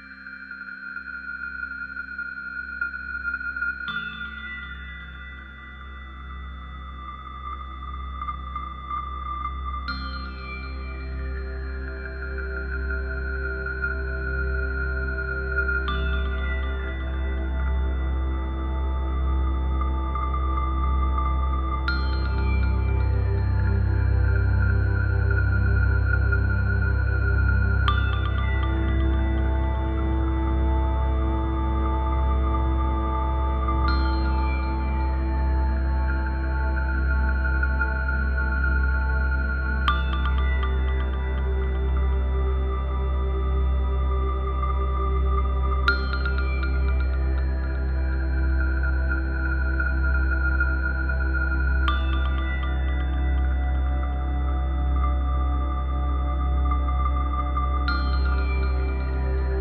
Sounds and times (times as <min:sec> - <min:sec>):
Tender music: 0:00.0 - 0:59.6.